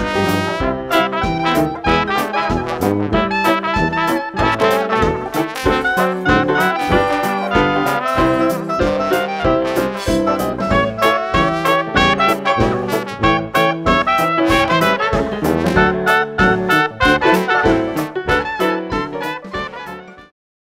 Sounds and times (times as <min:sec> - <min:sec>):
Music: 0:00.0 - 0:20.4.